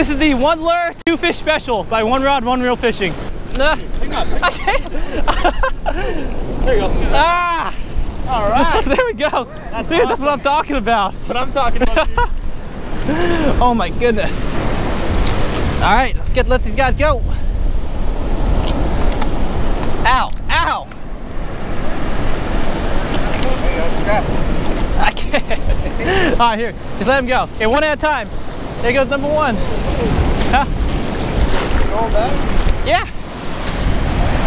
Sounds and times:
Waves, surf: 0:00.0 - 0:34.4
Wind noise (microphone): 0:10.7 - 0:27.6, 0:28.2 - 0:34.4.

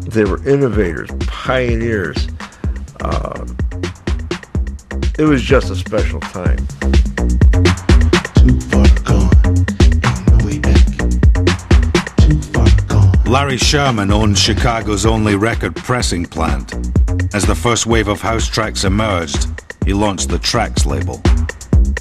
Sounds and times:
Speech: 0:00.0 - 0:02.3, 0:03.0 - 0:03.5, 0:05.2 - 0:06.6, 0:08.7 - 0:11.0, 0:12.2 - 0:21.3
Background music: 0:00.0 - 0:22.0.

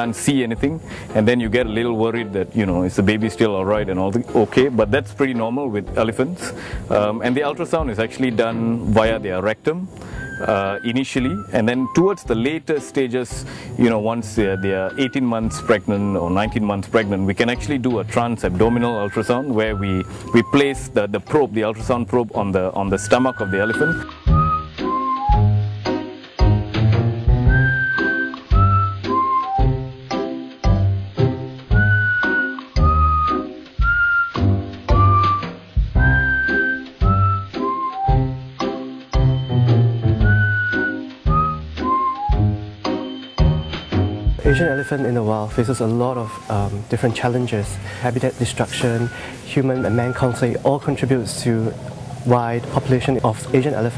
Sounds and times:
Music: 0:00.0 - 0:53.9.

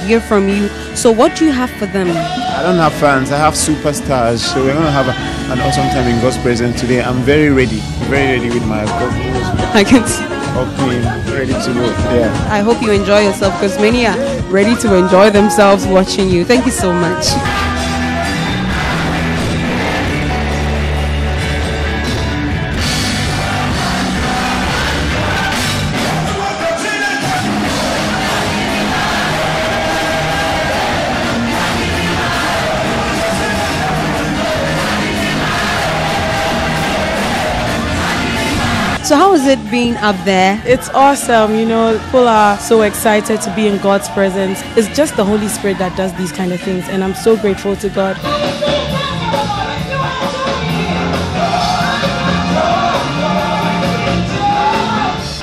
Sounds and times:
Music: 0:00.0 - 0:55.4
Speech: 0:00.1 - 0:17.4.

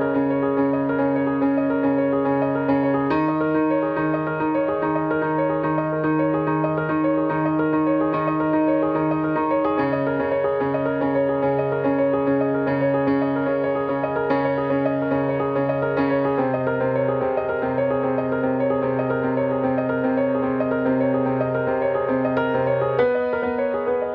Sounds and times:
Music: 0:00.0 - 0:24.1.

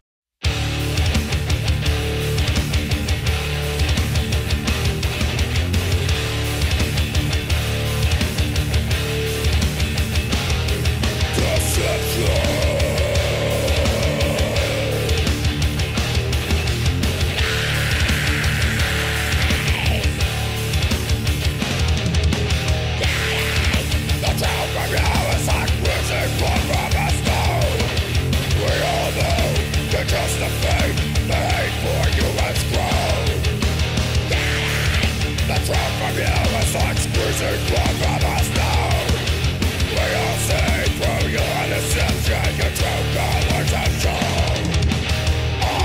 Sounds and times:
Music: 0:00.4 - 0:45.8.

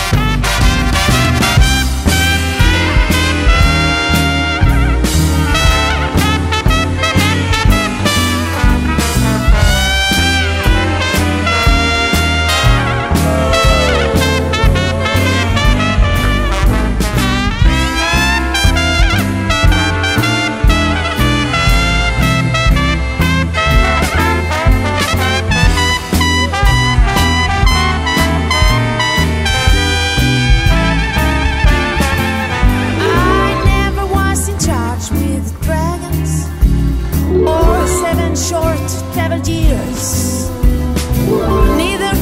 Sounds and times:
Swing music: 0:00.0 - 0:42.2.

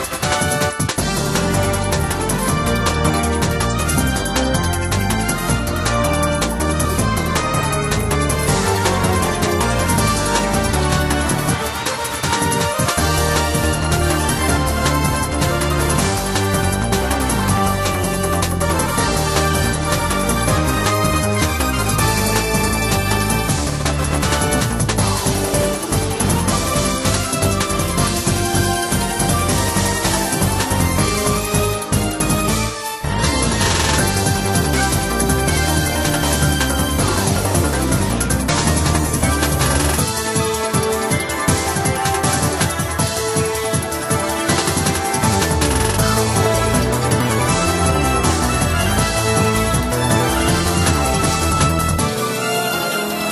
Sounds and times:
Music: 0:00.0 - 0:53.3.

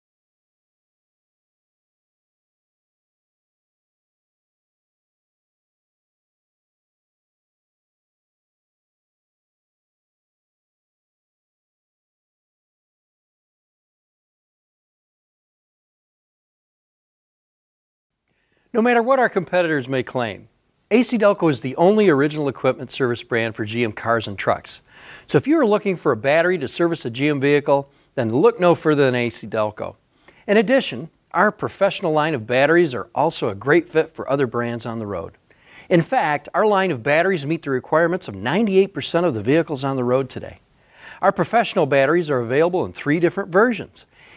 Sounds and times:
Speech: 0:18.7 - 0:40.6, 0:41.2 - 0:44.1.

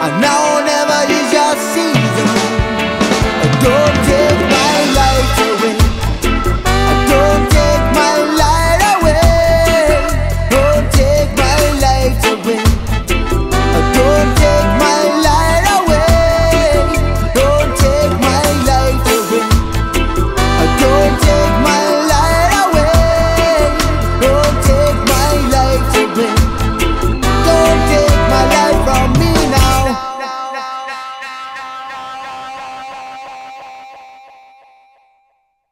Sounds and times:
Music: 0:00.0 - 0:35.6.

